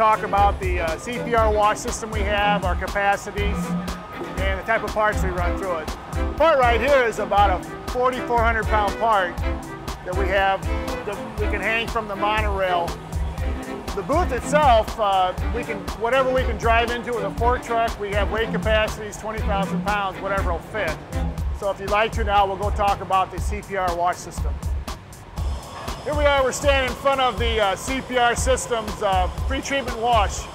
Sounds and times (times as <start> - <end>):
Speech: 0.0 - 3.7, 4.4 - 9.4, 10.1 - 12.9, 14.0 - 21.0, 21.6 - 24.6, 26.1 - 30.5
Music: 0.0 - 30.5.